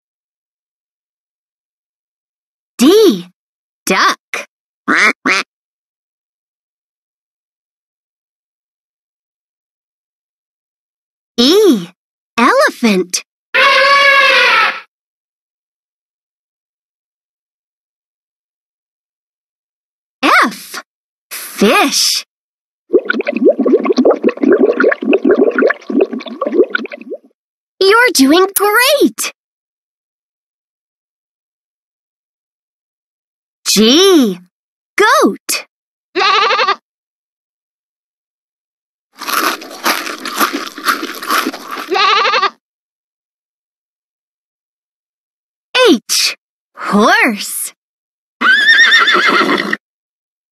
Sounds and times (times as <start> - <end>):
Speech: 2.8 - 3.3, 3.9 - 5.4, 11.4 - 13.2, 20.2 - 22.3, 27.8 - 29.4, 33.7 - 35.7, 45.8 - 47.8.